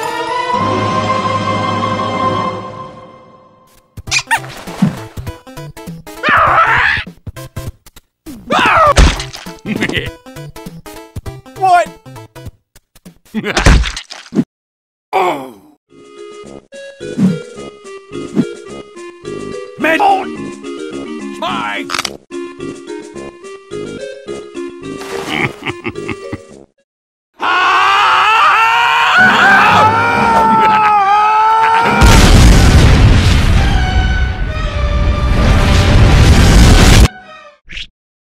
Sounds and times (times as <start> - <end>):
Music: 0.0 - 3.9, 4.7 - 6.3, 9.2 - 12.6, 15.9 - 26.8, 33.6 - 36.0, 37.1 - 37.6
Speech: 9.6 - 10.1, 11.6 - 12.0, 15.2 - 15.8, 19.8 - 20.3, 21.4 - 21.9.